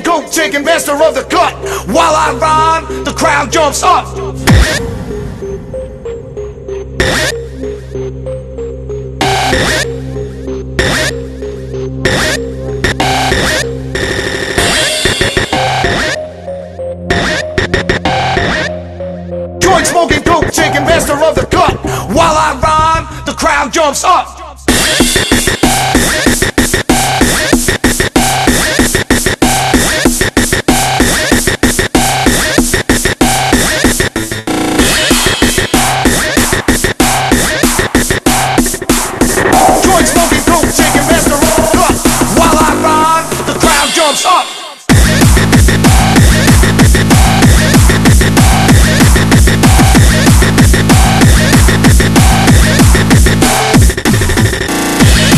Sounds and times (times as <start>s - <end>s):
Music: 0.0s - 55.3s.